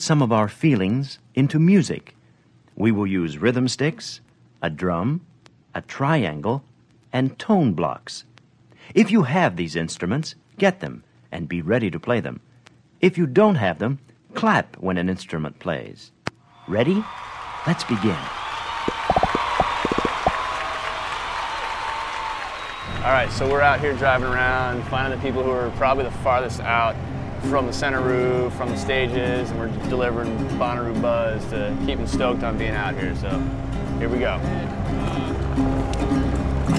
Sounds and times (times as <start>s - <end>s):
Speech: 0.0s - 2.2s, 2.8s - 8.3s, 8.9s - 12.4s, 13.0s - 17.1s, 17.7s - 18.3s, 23.0s - 33.4s, 34.0s - 35.4s.